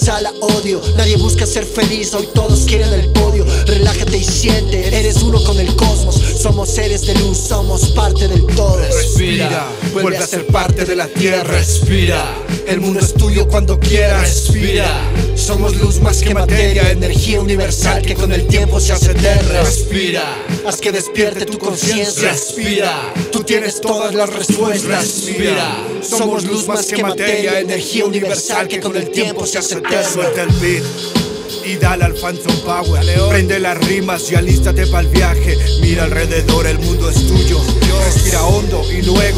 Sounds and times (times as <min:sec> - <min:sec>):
Hip hop music: 0:00.0 - 0:39.3
Rapping: 0:00.0 - 0:39.3.